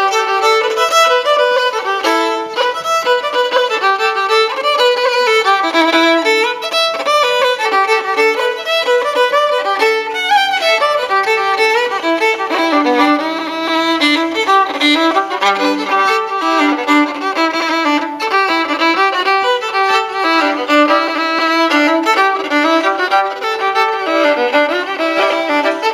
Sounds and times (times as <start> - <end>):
Violin, fiddle: 0.0 - 25.9.